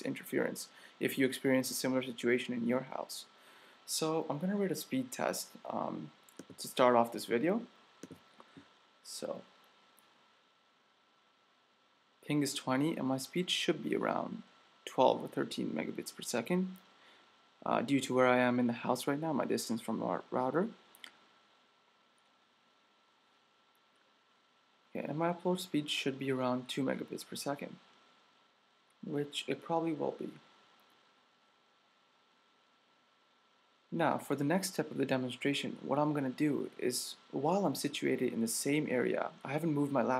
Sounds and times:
Speech: 0.0s - 3.3s, 3.9s - 7.8s, 9.0s - 9.5s, 12.2s - 16.8s, 17.6s - 20.8s, 24.9s - 27.8s, 29.0s - 30.5s, 33.9s - 40.1s.

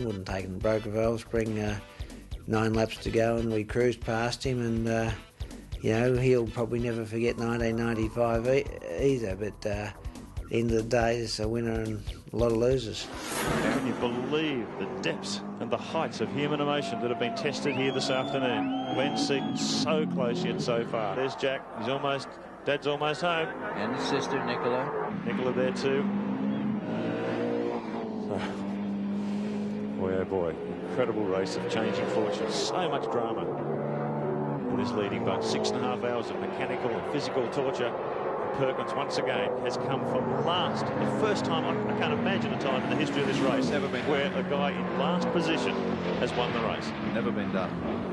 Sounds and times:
Race car, auto racing: 0.0s - 1.8s, 5.9s - 48.1s
Speech: 0.0s - 1.8s, 2.5s - 5.2s, 5.8s - 26.1s, 30.0s - 33.5s, 34.7s - 37.9s, 38.6s - 47.7s.

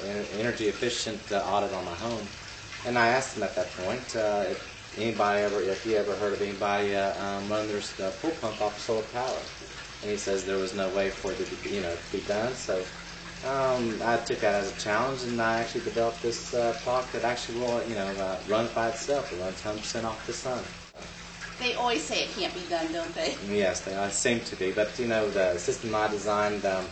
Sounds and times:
Water: 0.0s - 26.9s.

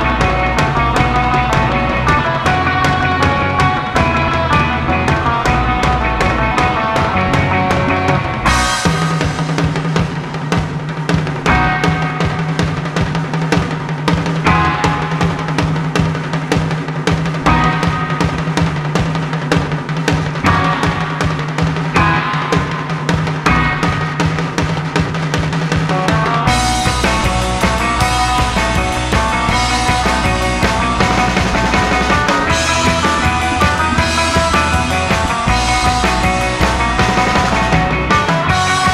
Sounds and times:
Music: 0.0s - 38.9s.

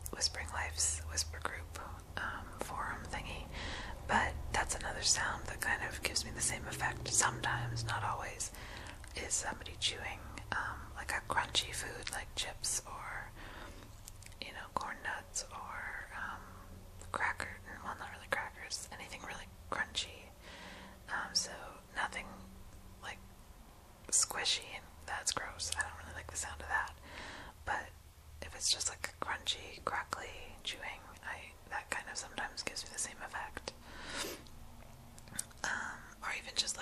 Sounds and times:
Whispering: 0.1s - 13.4s, 14.3s - 20.4s, 21.1s - 23.2s, 24.1s - 27.0s, 27.6s - 34.3s, 35.3s - 36.8s.

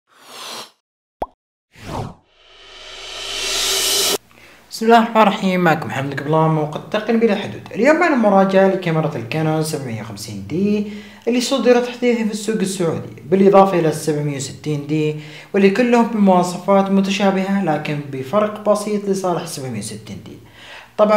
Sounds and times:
Speech: 4.7s - 20.4s.

